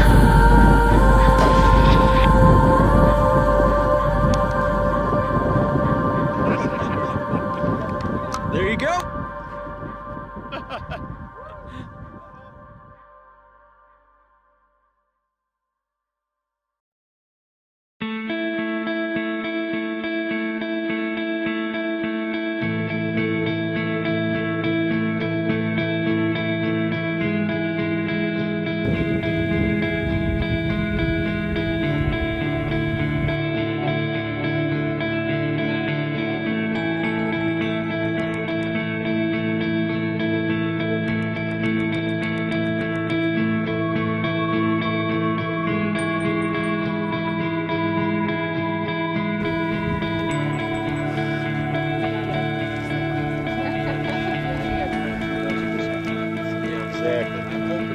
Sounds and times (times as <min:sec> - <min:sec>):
Ambient music: 0:00.0 - 0:14.8, 0:18.0 - 0:57.9.